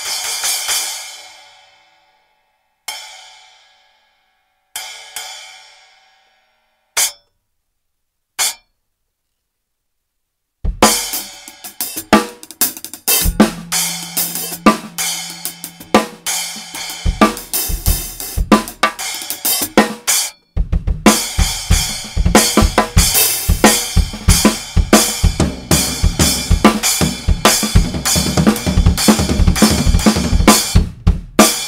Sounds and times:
Drum kit: 0.0 - 1.6, 7.0 - 7.2, 8.4 - 8.6, 10.6 - 31.6
Drum: 10.6 - 31.6.

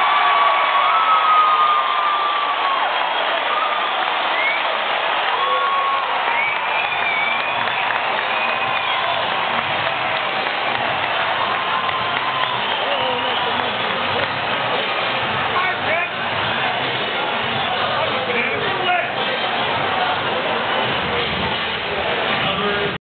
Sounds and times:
Speech: 17.6 - 23.0.

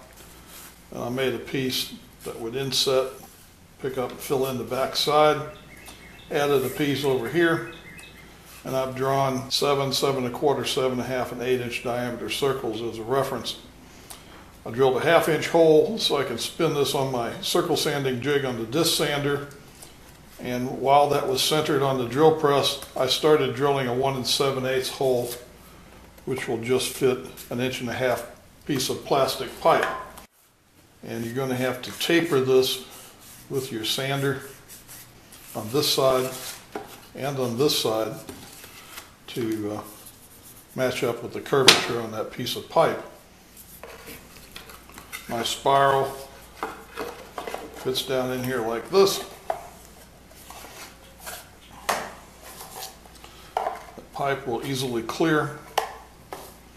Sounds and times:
Speech: 0.9 - 5.6, 6.3 - 7.8, 8.6 - 13.7, 14.6 - 19.6, 20.4 - 25.5, 26.2 - 30.0, 31.0 - 34.6, 35.5 - 36.5, 37.2 - 38.3, 39.3 - 40.0, 40.8 - 43.2, 45.3 - 46.3, 47.8 - 49.4, 54.1 - 55.7.

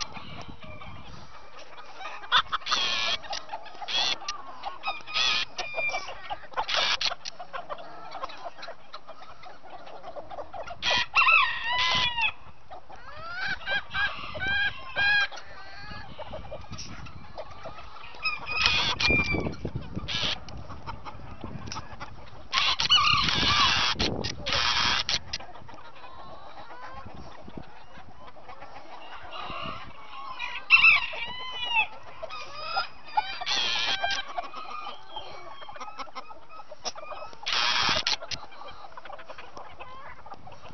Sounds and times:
Chicken, rooster: 0.0 - 40.7.

